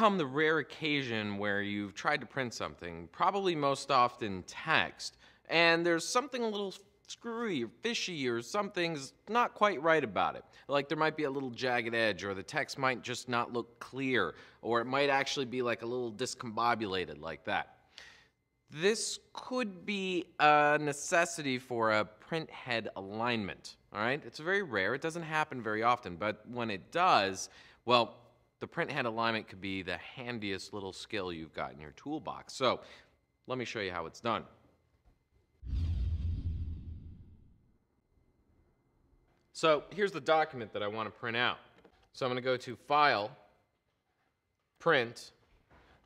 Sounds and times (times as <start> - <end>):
Speech: 0.0 - 17.7, 18.7 - 32.9, 33.5 - 34.6, 39.5 - 43.5, 44.8 - 45.4.